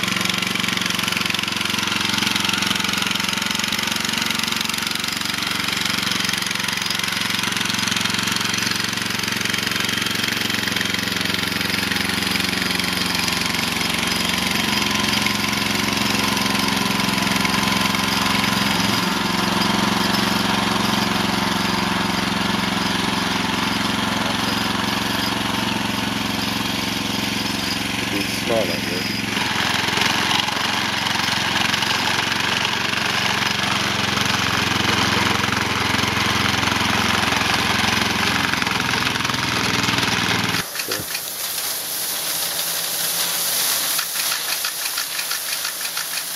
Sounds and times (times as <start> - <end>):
Speech: 28.1 - 29.2, 40.9 - 41.1.